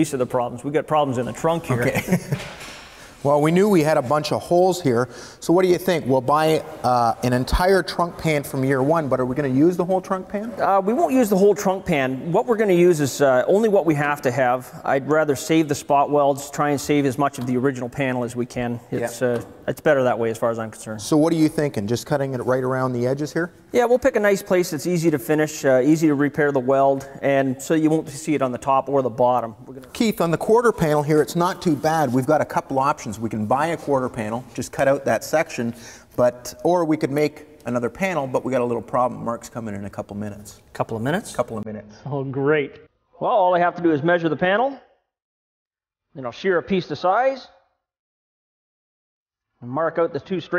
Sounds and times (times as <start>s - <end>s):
Speech: 0.0s - 2.1s, 3.2s - 44.9s, 46.2s - 47.6s, 49.6s - 50.5s.